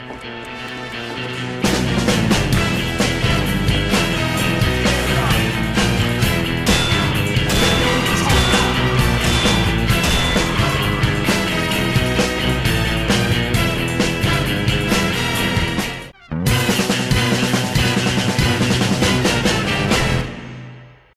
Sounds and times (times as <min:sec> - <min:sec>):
Music: 0:00.0 - 0:21.1.